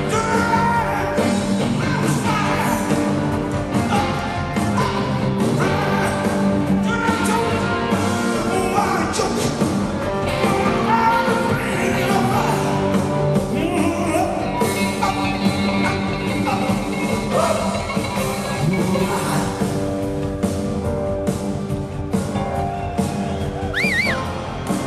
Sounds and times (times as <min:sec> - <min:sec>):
Music of Latin America: 0:09.1 - 0:19.8, 0:22.6 - 0:24.8.